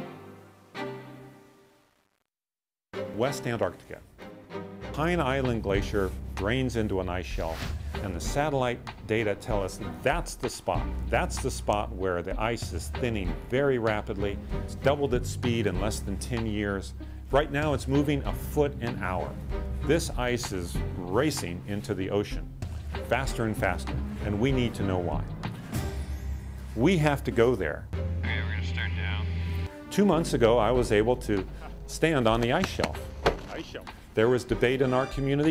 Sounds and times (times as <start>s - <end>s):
Music: 0.0s - 2.0s, 2.9s - 35.5s
Speech: 3.2s - 4.1s, 4.9s - 22.5s, 23.1s - 25.2s, 26.8s - 29.3s, 30.0s - 35.5s.